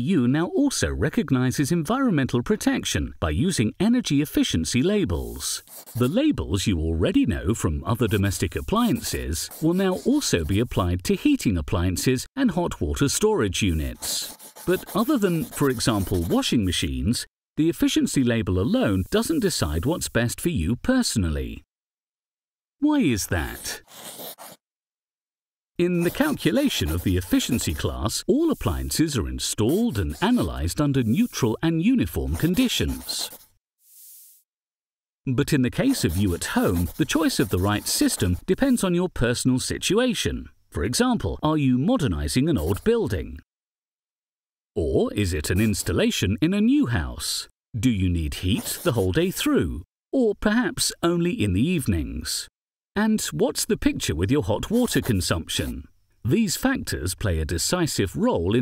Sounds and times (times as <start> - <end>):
Speech: 0.0 - 21.7, 22.8 - 23.9, 25.8 - 33.4, 35.3 - 43.4, 44.8 - 58.6.